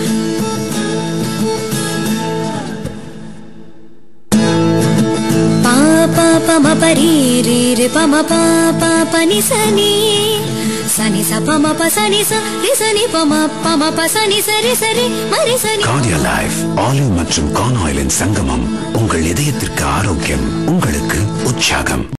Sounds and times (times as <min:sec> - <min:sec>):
Speech: 0:15.8 - 0:22.1
Traditional music: 0:15.9 - 0:22.1.